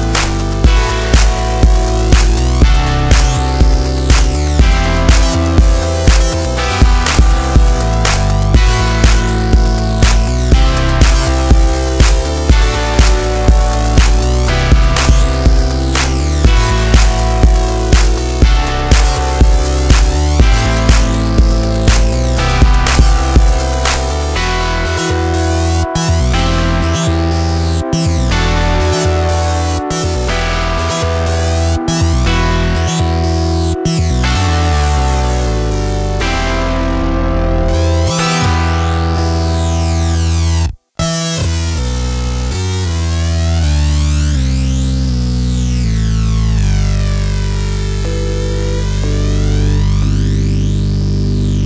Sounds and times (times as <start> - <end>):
Music: 0.0 - 51.6.